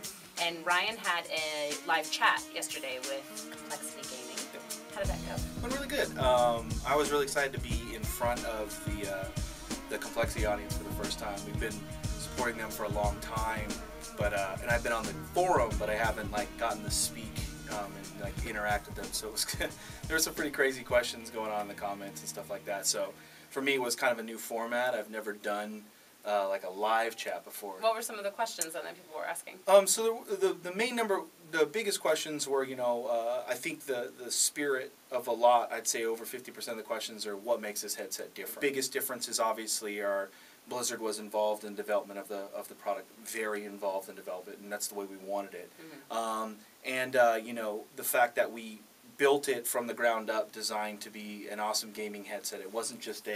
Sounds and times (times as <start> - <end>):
Speech: 0.0 - 53.3.